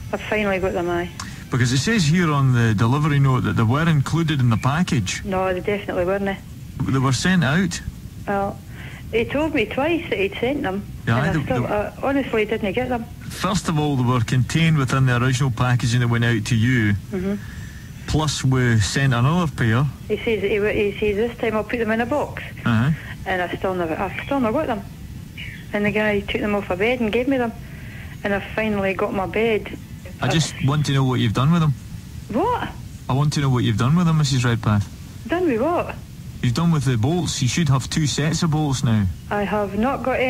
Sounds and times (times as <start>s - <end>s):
Speech: 0.1s - 8.6s, 9.2s - 17.4s, 18.1s - 24.8s, 25.7s - 27.6s, 28.2s - 40.2s.